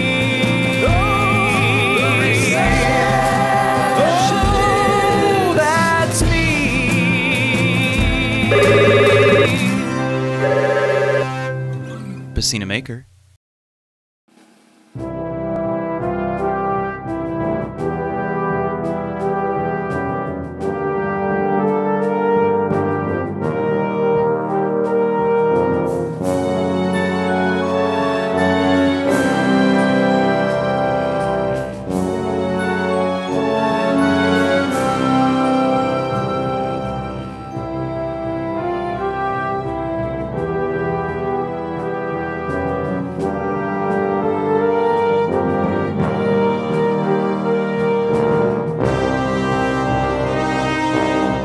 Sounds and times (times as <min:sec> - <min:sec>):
Music: 0:00.0 - 0:12.9, 0:14.3 - 0:51.4
Speech: 0:11.9 - 0:13.1.